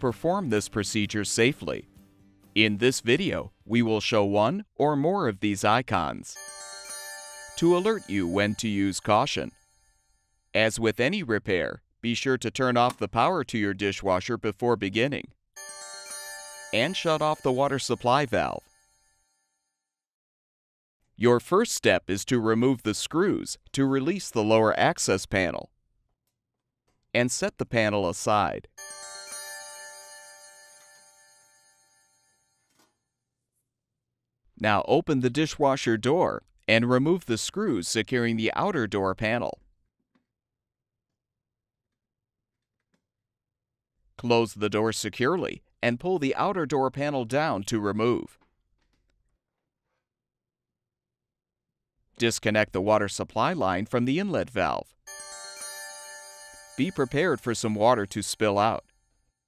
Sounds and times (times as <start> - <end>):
Speech: 0.0 - 1.9, 2.6 - 6.4, 7.6 - 9.5, 10.6 - 15.4, 16.8 - 18.6, 21.2 - 25.7, 27.2 - 28.7, 34.6 - 39.6, 44.2 - 48.4, 52.2 - 54.9, 56.8 - 58.8
Music: 0.0 - 4.3, 6.4 - 10.3, 15.6 - 19.7, 28.8 - 32.0, 55.1 - 58.7.